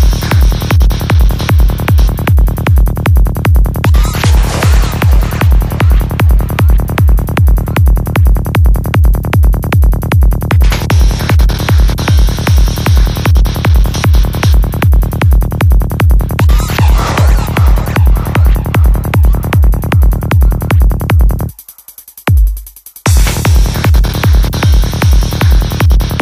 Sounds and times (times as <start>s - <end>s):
Music: 0.0s - 26.2s.